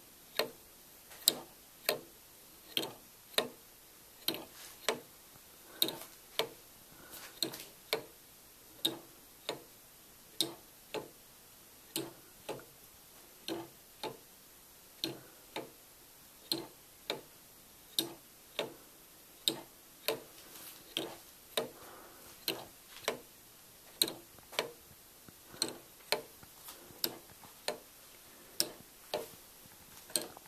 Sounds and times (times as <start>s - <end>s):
Tick-tock: 0.3s - 0.6s, 1.2s - 3.6s, 4.2s - 5.1s, 5.8s - 6.6s, 7.4s - 8.2s, 8.8s - 9.7s, 10.4s - 11.2s, 11.9s - 12.7s, 13.4s - 14.3s, 15.0s - 15.8s, 16.4s - 18.8s, 19.4s - 20.3s, 20.9s - 21.8s, 22.4s - 23.3s, 23.9s - 24.8s, 25.5s - 26.4s, 30.1s - 30.4s.